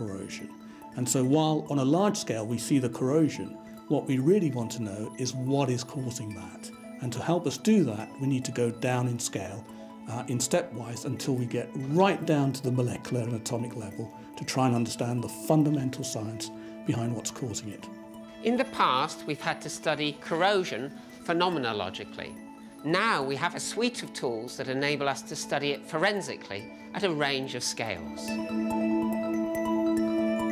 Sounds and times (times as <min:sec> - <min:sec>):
Music: 0:00.0 - 0:30.5
Speech: 0:01.0 - 0:17.8, 0:18.4 - 0:22.3, 0:22.9 - 0:28.4.